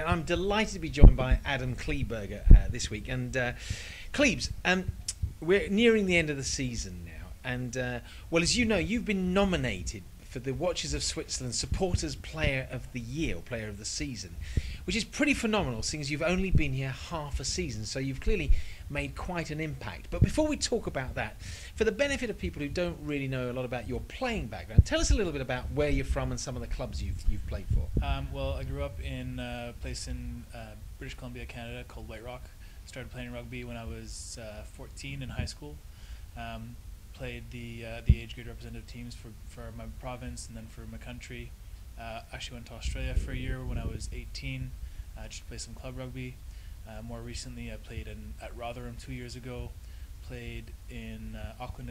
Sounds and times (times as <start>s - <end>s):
Speech: 0.0s - 35.8s, 36.4s - 51.9s.